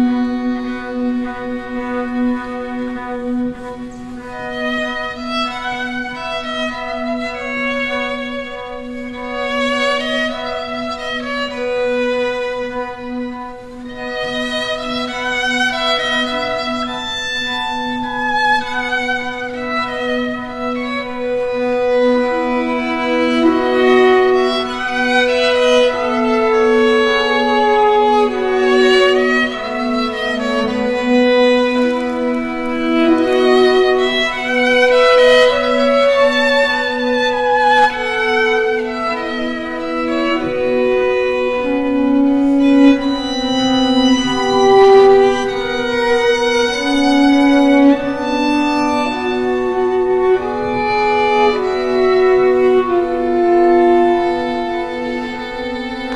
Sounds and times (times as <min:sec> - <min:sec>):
Violin, fiddle: 0:00.0 - 0:56.1.